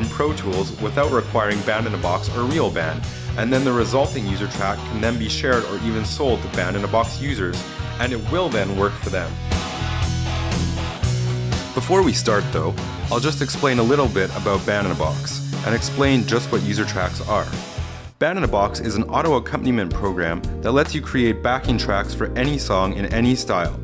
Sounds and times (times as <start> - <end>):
Speech: 0.0 - 9.4, 11.8 - 17.6, 18.2 - 23.8
Music: 0.0 - 23.8.